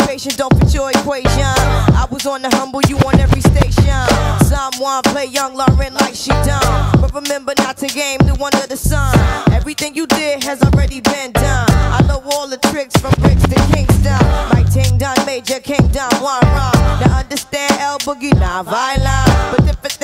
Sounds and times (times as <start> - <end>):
Rapping: 0.0 - 20.0.